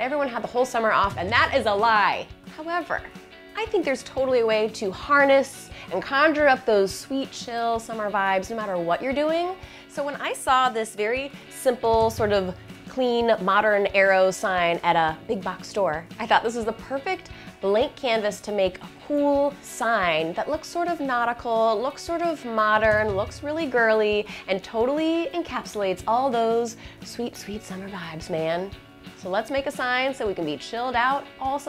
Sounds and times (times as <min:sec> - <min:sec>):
Music: 0:00.0 - 0:31.6
Speech: 0:00.0 - 0:31.6.